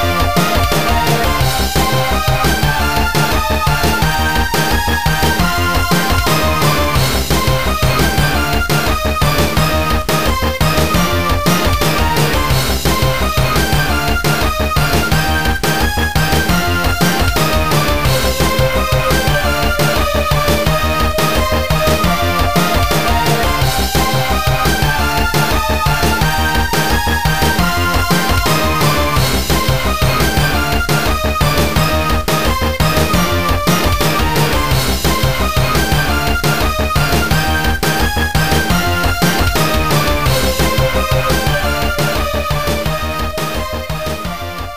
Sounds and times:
Theme music: 0:00.0 - 0:44.7.

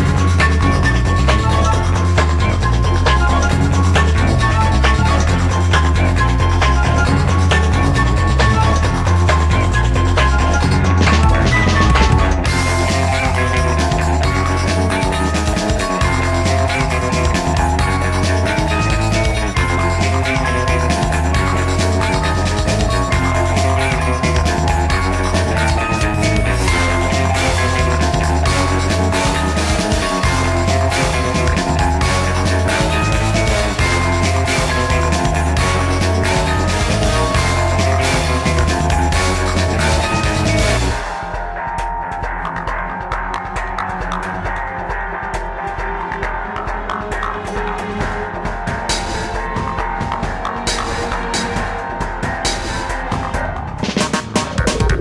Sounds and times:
Music: 0:00.0 - 0:55.0.

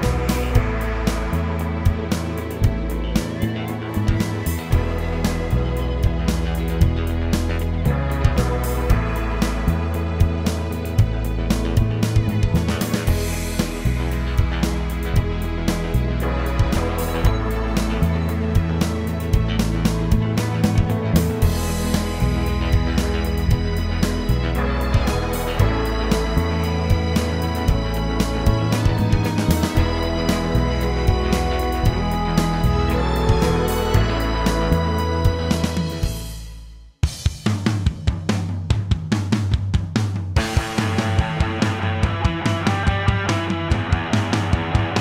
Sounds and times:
Music: 0:00.0 - 0:45.0.

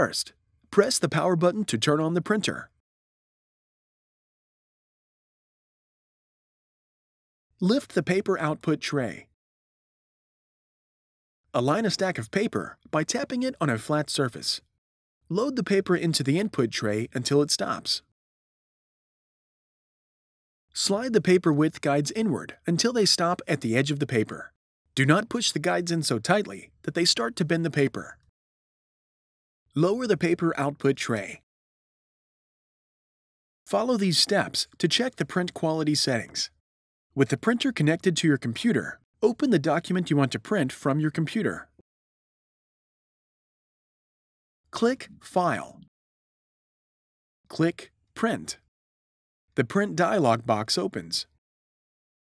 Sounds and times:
Speech: 0:00.0 - 0:02.8, 0:07.6 - 0:09.4, 0:11.6 - 0:14.7, 0:15.3 - 0:18.1, 0:20.8 - 0:28.2, 0:29.7 - 0:31.5, 0:33.7 - 0:36.6, 0:37.2 - 0:41.8, 0:44.8 - 0:45.9, 0:47.5 - 0:48.7, 0:49.6 - 0:51.4.

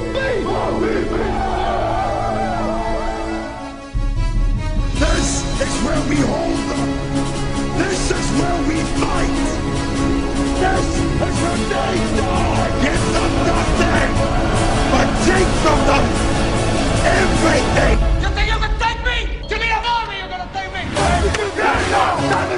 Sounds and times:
Music: 0:00.0 - 0:22.5
Speech: 0:05.0 - 0:06.9, 0:07.8 - 0:09.6, 0:14.9 - 0:16.1, 0:17.0 - 0:22.5.

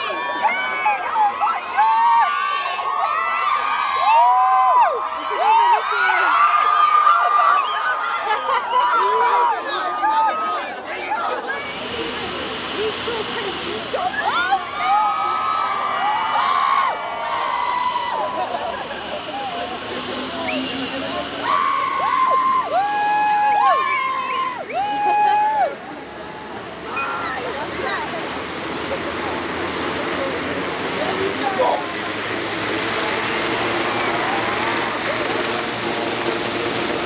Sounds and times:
Helicopter: 0:10.0 - 0:37.0.

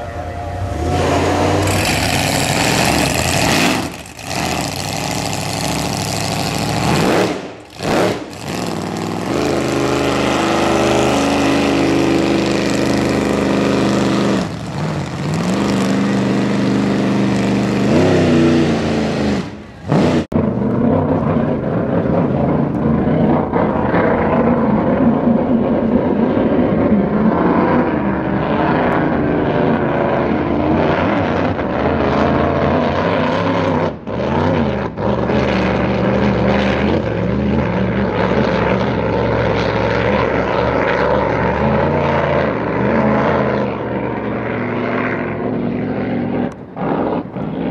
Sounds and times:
Motorboat, speedboat: 0:00.0 - 0:47.7.

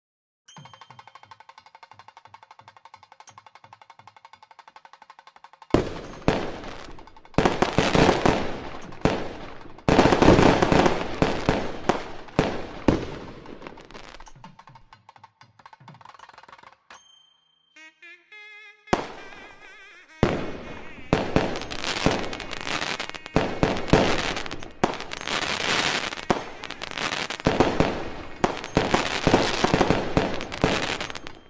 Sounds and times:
Music: 0:00.5 - 0:31.4
Firecracker: 0:05.7 - 0:14.5, 0:18.9 - 0:31.4.

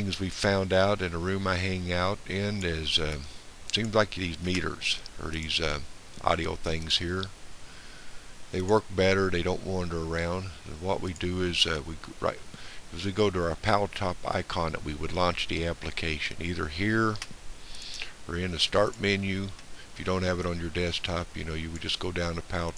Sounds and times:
Speech: 0:00.0 - 0:07.3, 0:08.5 - 0:17.3, 0:18.3 - 0:22.7.

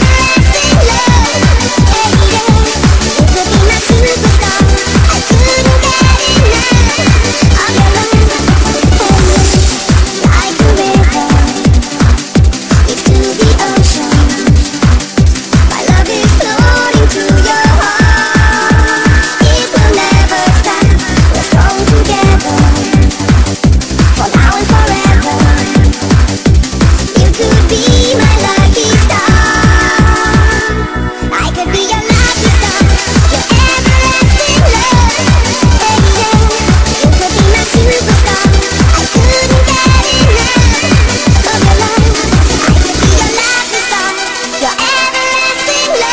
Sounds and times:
Trance music: 0:00.0 - 0:46.1.

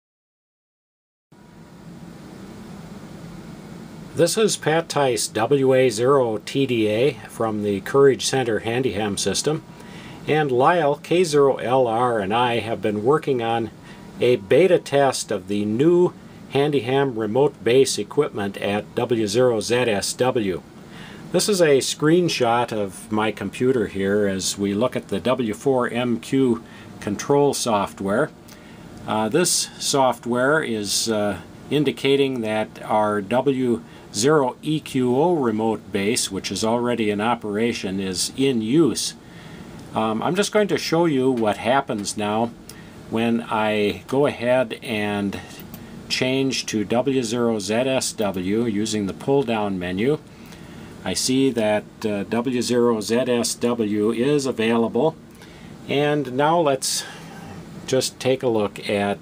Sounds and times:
Speech: 0:04.2 - 0:20.7, 0:21.3 - 0:28.4, 0:29.1 - 0:39.2, 0:39.9 - 0:50.3, 0:51.0 - 0:55.2, 0:55.9 - 0:57.2, 0:57.9 - 0:59.2.

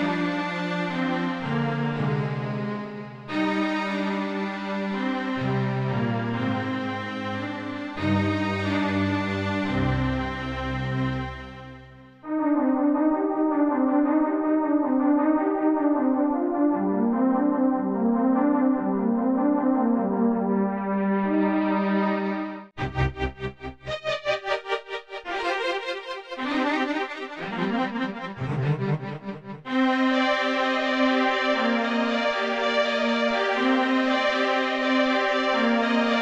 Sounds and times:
Music: 0:00.0 - 0:36.2.

